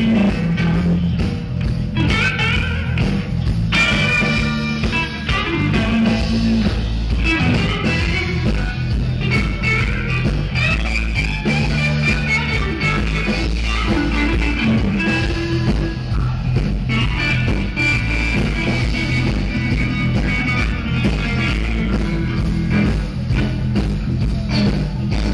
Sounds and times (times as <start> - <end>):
Blues: 0.0 - 25.3
Electric guitar: 0.0 - 25.3.